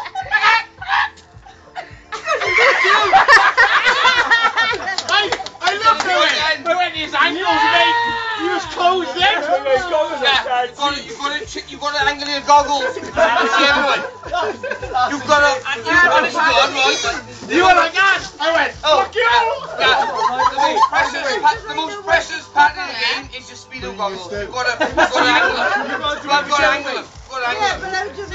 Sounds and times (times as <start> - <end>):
Music: 0.0 - 28.3
Speech: 4.7 - 28.3.